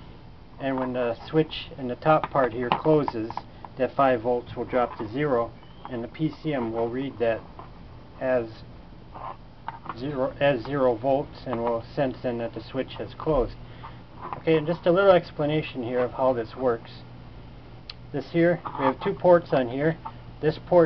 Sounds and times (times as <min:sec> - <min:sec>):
Speech: 0:00.6 - 0:07.5, 0:08.2 - 0:08.7, 0:09.9 - 0:13.6, 0:14.4 - 0:17.1, 0:18.1 - 0:20.8.